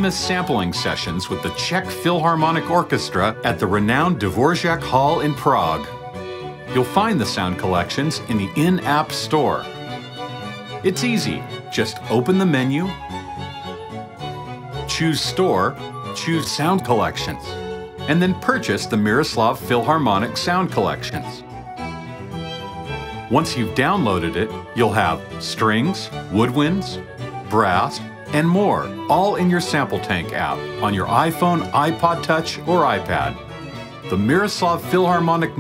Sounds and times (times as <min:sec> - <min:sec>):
Speech: 0:00.0 - 0:05.9, 0:06.7 - 0:09.7, 0:10.9 - 0:13.0, 0:14.9 - 0:17.5, 0:18.1 - 0:21.4, 0:23.3 - 0:33.4, 0:34.1 - 0:35.6
Music: 0:00.0 - 0:35.6.